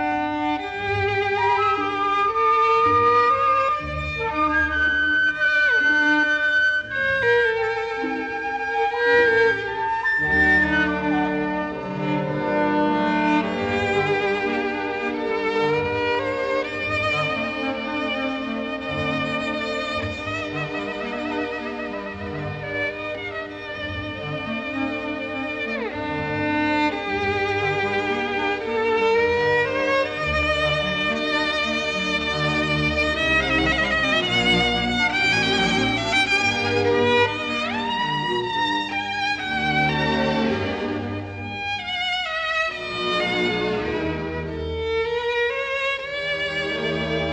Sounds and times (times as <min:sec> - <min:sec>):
Orchestra: 0:00.0 - 0:47.3
Violin, fiddle: 0:00.0 - 0:47.3.